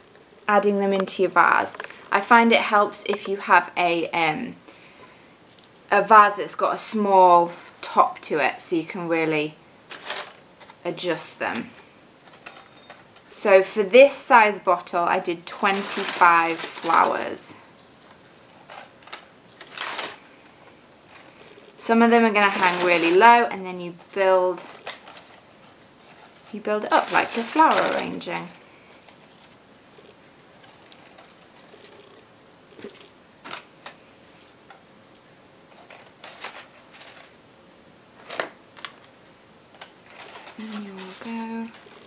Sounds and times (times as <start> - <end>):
Inside, small room: 0.0 - 42.0
Speech: 0.5 - 4.6, 5.9 - 9.6, 10.9 - 11.7, 13.3 - 17.6, 21.8 - 24.7, 26.6 - 28.6, 40.6 - 41.8.